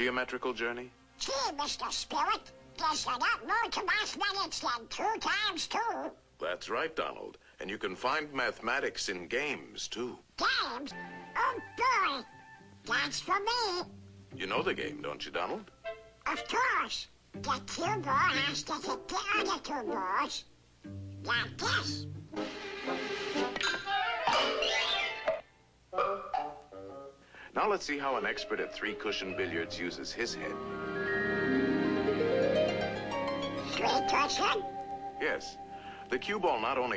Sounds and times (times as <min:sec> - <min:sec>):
Music: 0:00.0 - 0:03.4, 0:10.8 - 0:20.0, 0:20.8 - 0:25.4, 0:26.4 - 0:27.2, 0:28.0 - 0:36.9
Speech: 0:00.0 - 0:15.7, 0:16.3 - 0:20.5, 0:21.3 - 0:22.1, 0:27.6 - 0:30.6, 0:33.7 - 0:34.6, 0:35.2 - 0:36.9.